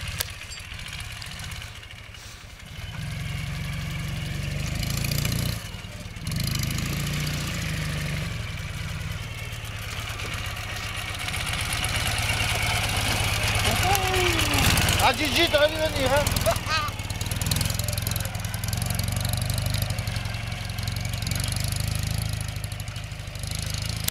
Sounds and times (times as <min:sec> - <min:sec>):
Motor vehicle (road): 0:00.0 - 0:24.1
Speech: 0:13.6 - 0:16.9.